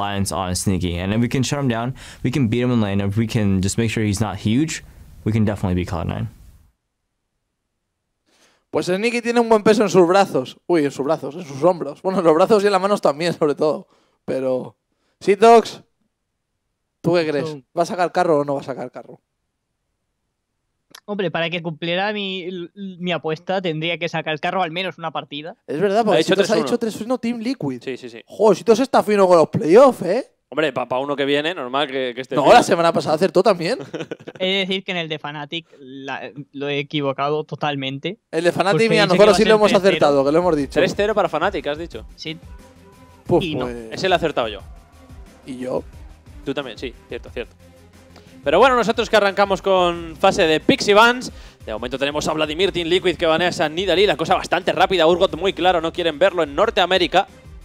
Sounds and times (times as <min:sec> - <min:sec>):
Speech: 0:00.0 - 0:06.3, 0:08.8 - 0:15.8, 0:17.1 - 0:19.2, 0:21.0 - 0:42.4, 0:43.3 - 0:44.6, 0:45.5 - 0:45.8, 0:46.5 - 0:47.5, 0:48.5 - 0:57.3.